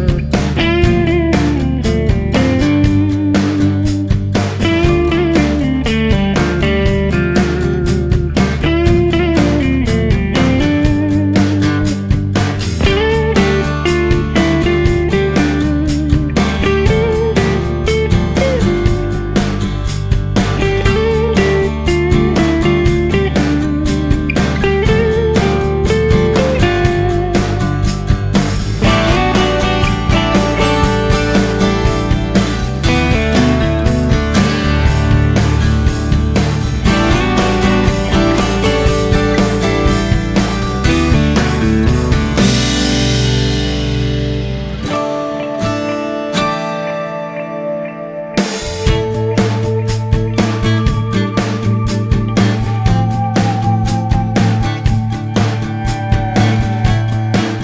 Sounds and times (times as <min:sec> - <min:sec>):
Music: 0:00.0 - 0:57.6.